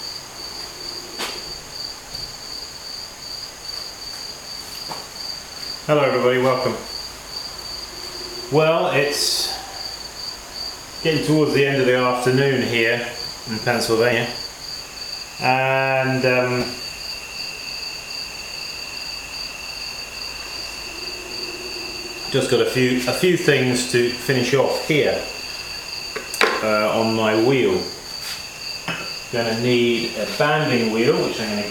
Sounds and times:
Speech: 5.9s - 6.9s, 8.5s - 9.7s, 11.0s - 14.4s, 15.4s - 16.8s, 22.3s - 25.3s, 26.4s - 28.0s, 29.3s - 31.7s.

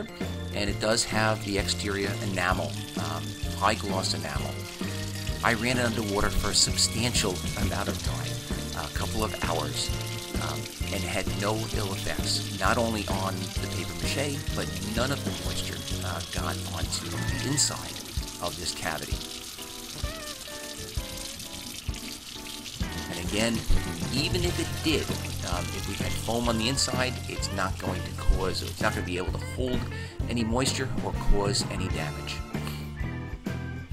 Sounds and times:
Speech: 0.0s - 4.6s, 5.4s - 19.2s, 23.1s - 32.5s
Music: 0.0s - 33.9s.

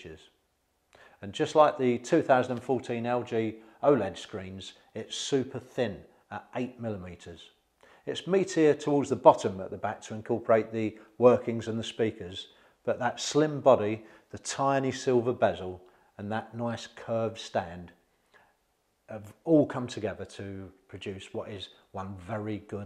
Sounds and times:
Speech: 0.0s - 0.4s, 1.2s - 18.0s, 19.1s - 22.8s.

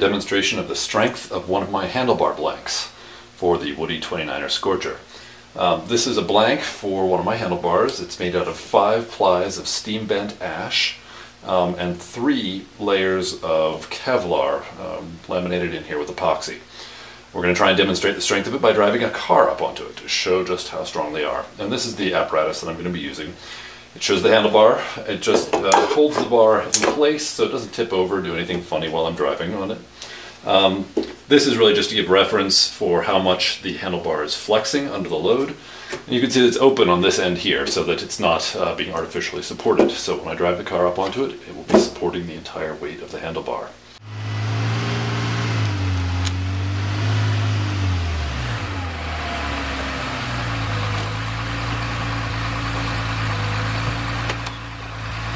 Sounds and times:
Speech: 0.0s - 16.7s, 17.3s - 43.8s.

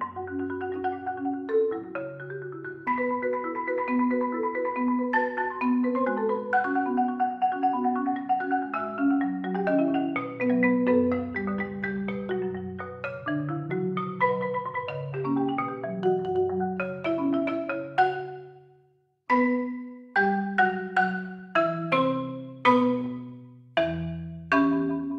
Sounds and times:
Marimba, xylophone: 0.0s - 18.7s, 19.3s - 25.1s.

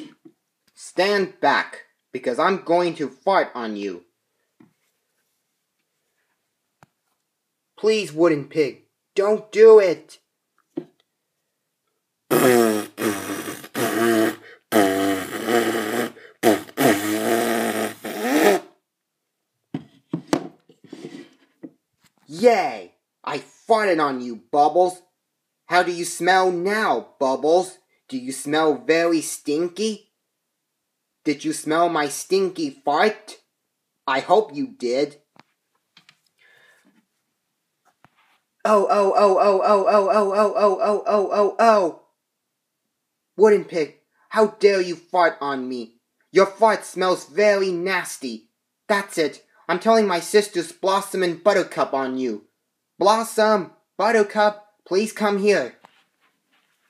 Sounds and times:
Inside, small room: 0.0s - 56.8s.

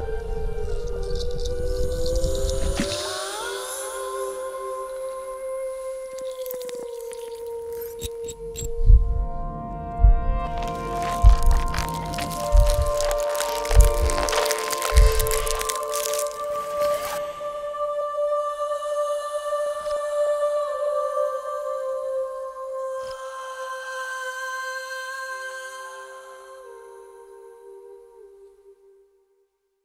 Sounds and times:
Music: 0.0s - 29.6s
Crack: 6.1s - 8.3s, 10.6s - 17.2s.

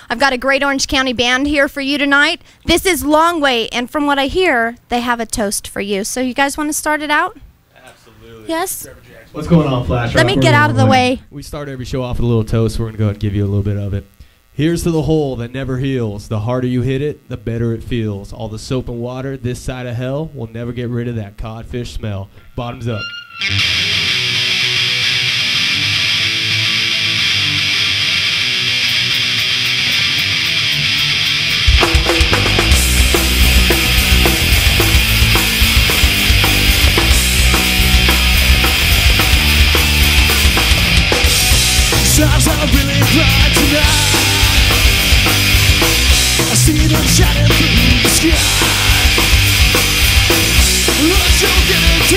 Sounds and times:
Grunge: 9.5s - 11.2s, 22.9s - 52.1s
Rock and roll: 9.6s - 11.2s, 22.9s - 52.1s
Heavy metal: 23.1s - 52.1s
Punk rock: 23.4s - 52.1s
Exciting music: 28.4s - 52.1s.

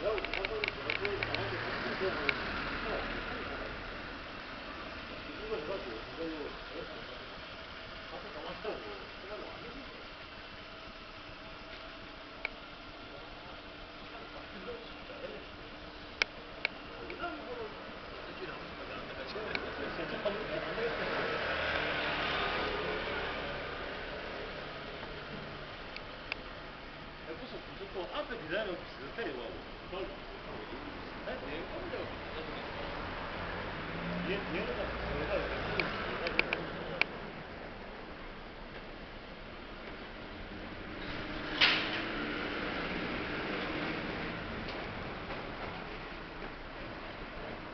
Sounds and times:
Speech: 0.0s - 3.9s, 5.3s - 7.4s, 8.1s - 10.1s, 13.1s - 15.5s, 16.9s - 21.4s, 27.2s - 33.0s, 34.1s - 37.2s.

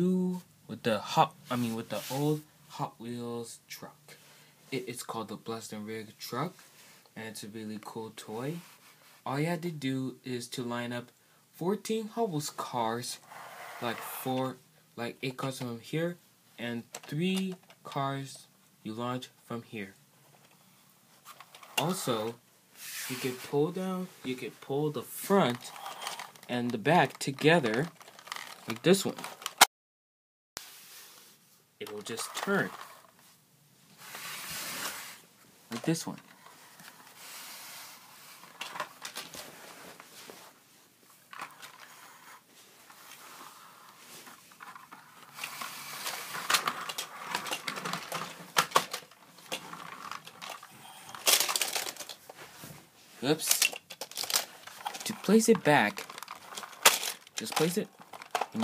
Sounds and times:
Speech: 0.0s - 6.6s, 7.2s - 13.2s, 13.8s - 20.0s, 21.8s - 22.4s, 23.1s - 25.8s, 26.5s - 27.9s, 28.6s - 29.2s, 31.8s - 32.8s, 35.7s - 36.2s, 53.2s - 53.7s, 55.0s - 56.0s, 57.4s - 57.9s.

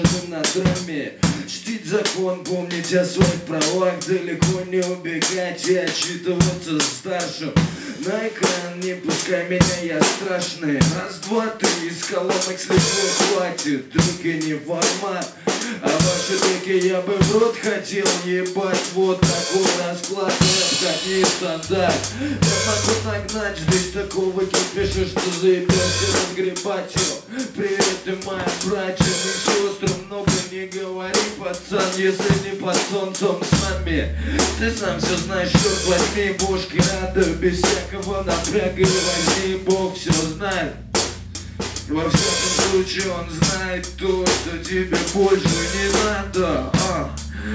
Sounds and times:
Music: 0.0s - 47.5s.

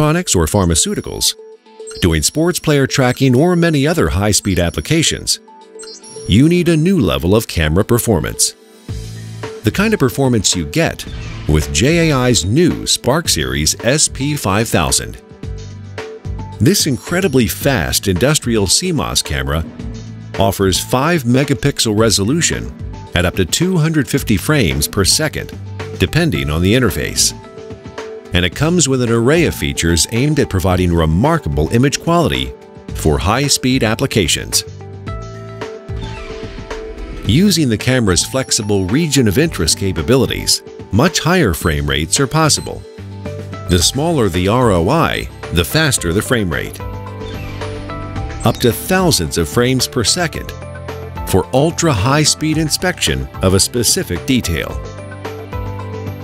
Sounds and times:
Speech: 0.0s - 1.4s, 2.0s - 5.4s, 6.3s - 8.6s, 9.6s - 15.2s, 16.6s - 19.7s, 20.4s - 27.4s, 28.3s - 34.7s, 37.3s - 42.8s, 43.7s - 46.8s, 48.4s - 50.6s, 51.3s - 54.8s
Music: 0.0s - 56.2s.

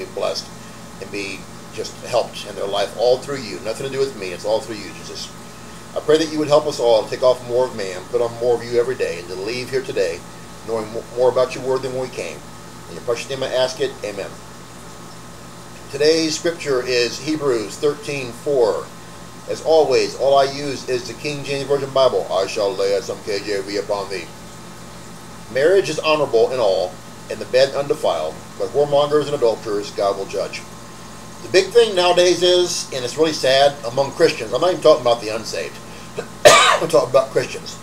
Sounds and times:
Speech: 0.0s - 5.4s, 6.0s - 14.4s, 15.9s - 18.9s, 19.5s - 24.3s, 25.5s - 30.7s, 31.4s - 37.8s.

